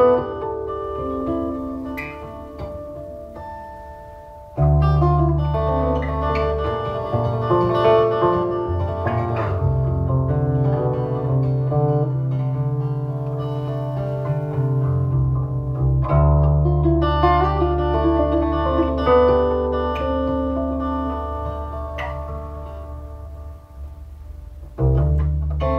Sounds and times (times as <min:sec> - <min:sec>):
Strum: 0:00.0 - 0:25.7.